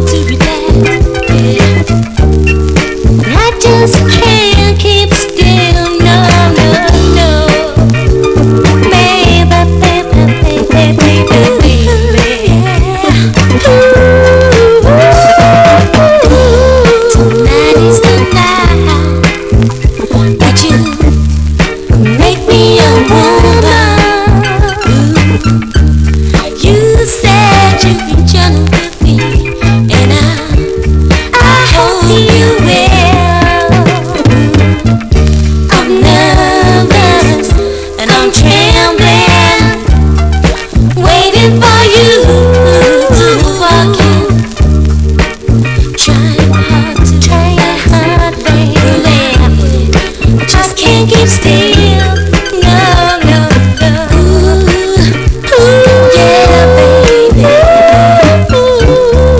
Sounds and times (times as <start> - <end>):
Reggae: 0.0 - 59.3.